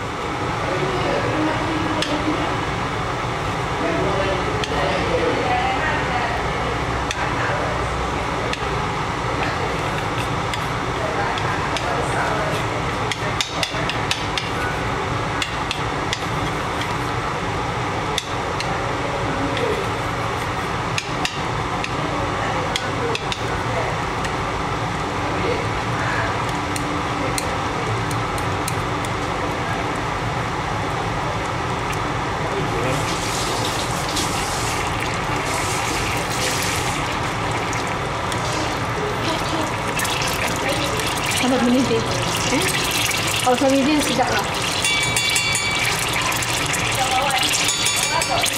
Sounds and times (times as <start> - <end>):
Speech: 10.9 - 15.1, 43.5 - 44.5
Liquid: 32.8 - 48.5.